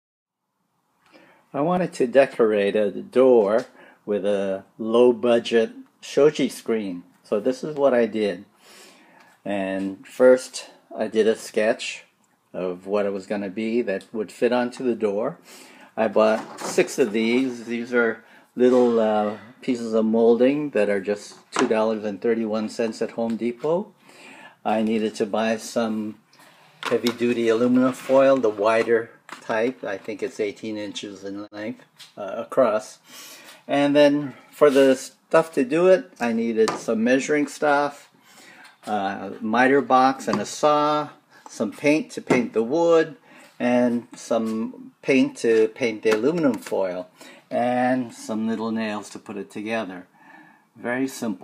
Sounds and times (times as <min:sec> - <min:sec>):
Speech: 0:01.5 - 0:08.5, 0:09.4 - 0:15.4, 0:16.0 - 0:23.9, 0:24.6 - 0:26.2, 0:26.9 - 0:33.0, 0:33.7 - 0:38.1, 0:38.8 - 0:50.1, 0:50.8 - 0:51.4.